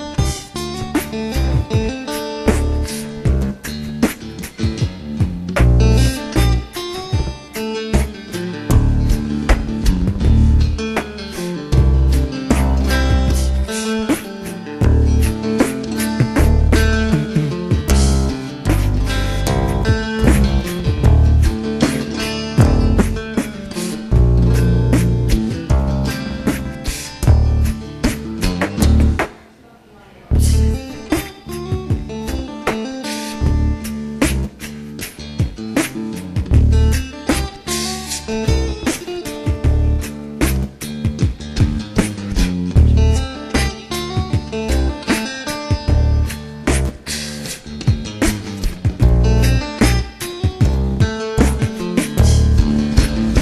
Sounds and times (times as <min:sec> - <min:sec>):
Strum: 0:00.0 - 0:29.5, 0:30.2 - 0:53.4.